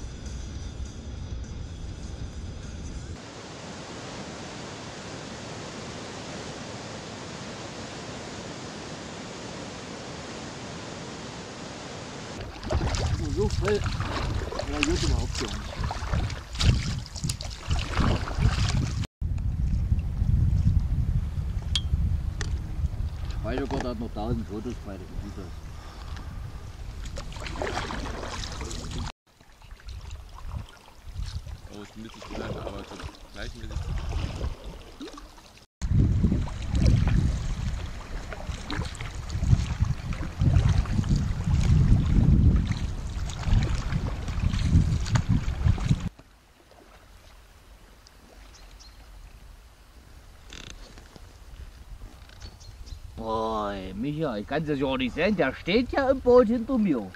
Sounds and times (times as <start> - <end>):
Rowboat, canoe, kayak: 3.3 - 20.1, 22.5 - 57.1
Speech: 13.2 - 13.9, 14.6 - 15.8, 23.4 - 25.5, 31.7 - 33.8, 53.2 - 57.1.